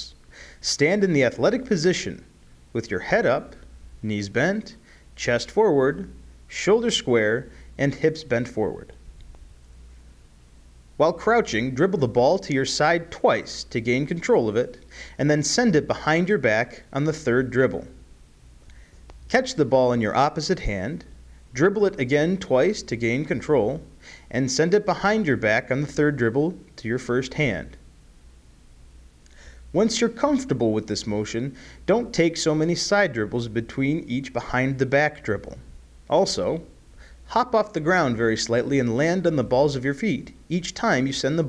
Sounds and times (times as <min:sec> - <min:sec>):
Speech: 0:00.0 - 0:09.0, 0:11.0 - 0:18.0, 0:19.3 - 0:27.8, 0:29.7 - 0:41.4.